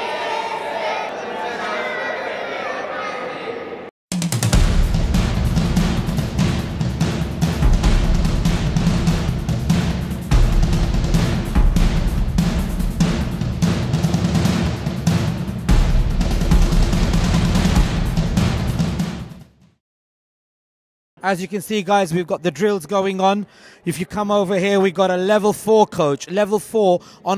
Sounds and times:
Speech: 0:00.1 - 0:03.8, 0:21.2 - 0:27.3
Music: 0:04.1 - 0:19.8.

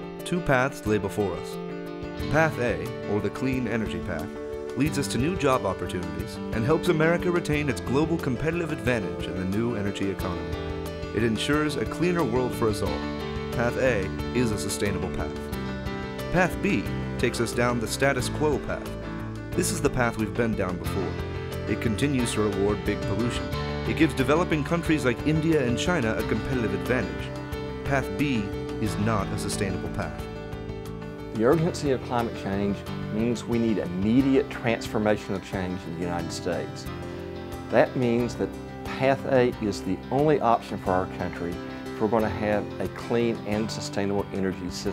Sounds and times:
Music: 0:00.0 - 0:44.9
Speech: 0:00.2 - 0:01.6, 0:02.3 - 0:10.4, 0:11.1 - 0:13.0, 0:13.6 - 0:15.4, 0:16.3 - 0:18.9, 0:19.6 - 0:27.3, 0:27.9 - 0:30.2, 0:31.3 - 0:36.9, 0:37.7 - 0:44.9.

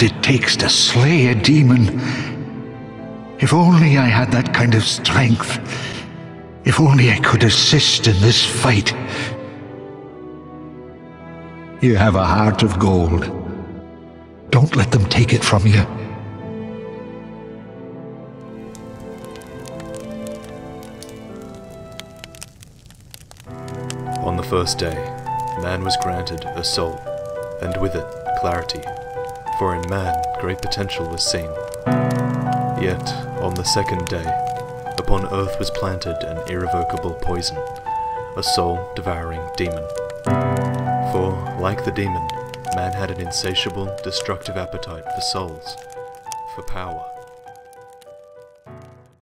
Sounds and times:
Speech: 0:00.0 - 0:02.4, 0:03.4 - 0:05.7, 0:06.6 - 0:09.4, 0:11.8 - 0:13.5, 0:14.5 - 0:16.1, 0:24.2 - 0:27.0, 0:27.6 - 0:28.9, 0:29.5 - 0:31.6, 0:32.8 - 0:34.4, 0:35.0 - 0:37.6, 0:38.4 - 0:40.0, 0:41.0 - 0:45.8, 0:46.5 - 0:47.2
Music: 0:00.0 - 0:49.2.

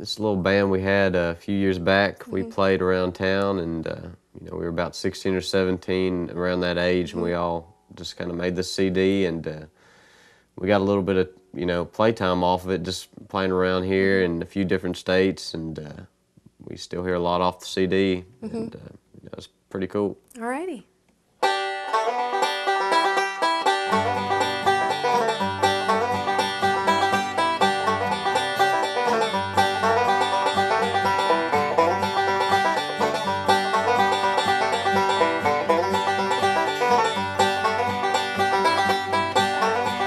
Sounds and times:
Guitar: 0:00.0 - 0:09.5, 0:18.4 - 0:18.9, 0:21.4 - 0:40.0
Bluegrass: 0:00.0 - 0:09.7, 0:21.4 - 0:40.0
Speech: 0:00.0 - 0:09.7, 0:10.6 - 0:20.9
Banjo: 0:21.4 - 0:40.0.

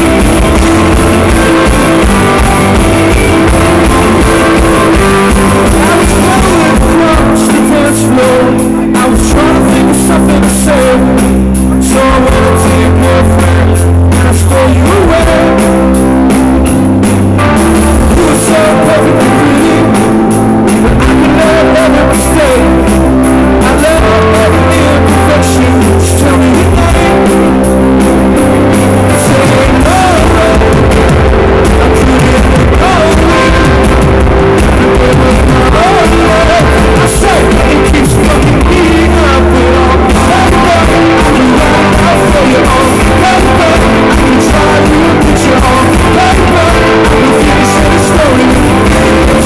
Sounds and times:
Tender music: 0:00.0 - 0:49.4.

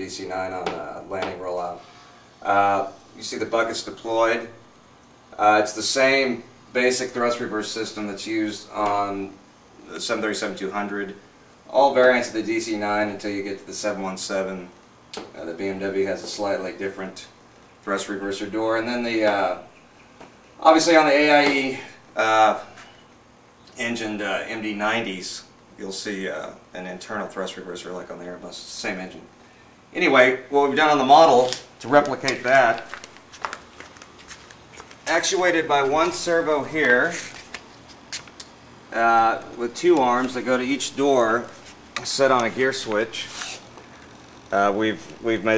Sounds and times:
Speech: 0:00.0 - 0:04.6, 0:05.4 - 0:19.7, 0:20.6 - 0:22.8, 0:23.8 - 0:32.9, 0:35.1 - 0:37.3, 0:38.9 - 0:43.5, 0:44.5 - 0:45.5
Inside, small room: 0:00.0 - 0:45.5.

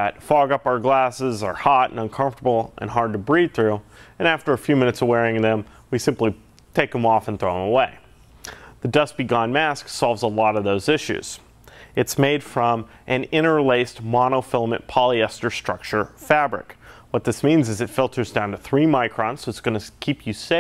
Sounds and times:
Speech: 0:00.0 - 0:08.1, 0:08.8 - 0:11.4, 0:12.0 - 0:20.6.

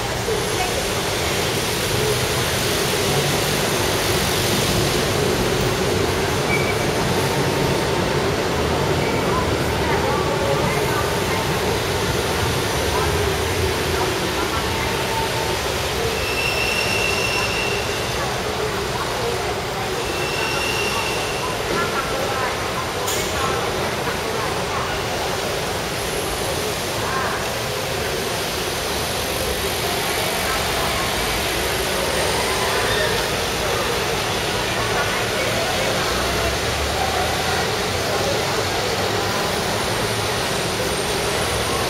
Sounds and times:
Speech: 0:00.0 - 0:41.9.

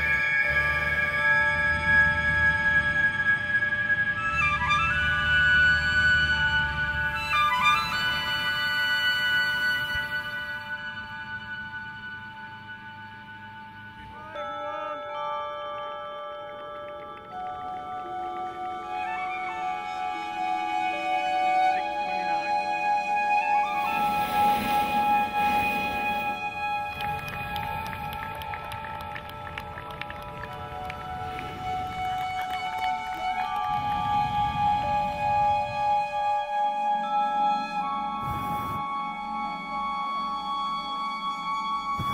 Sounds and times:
Music: 0:00.0 - 0:42.1.

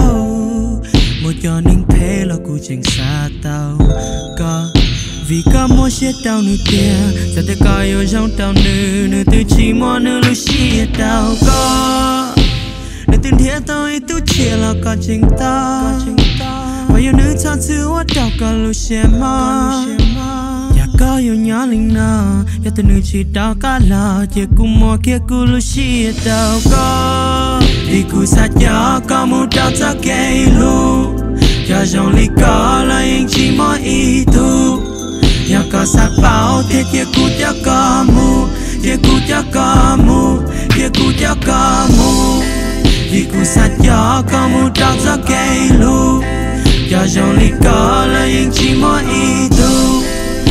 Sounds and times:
Music: 0:00.0 - 0:50.5.

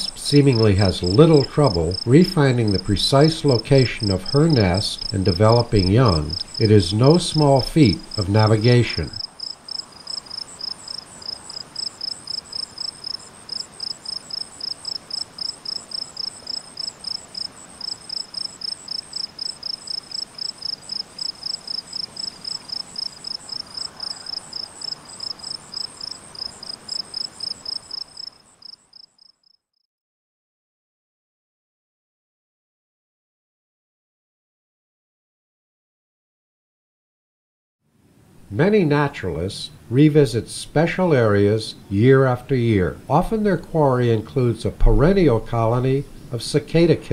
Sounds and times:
Outside, rural or natural: 0:00.0 - 0:29.8, 0:37.8 - 0:47.1
Insect: 0:00.0 - 0:29.9.

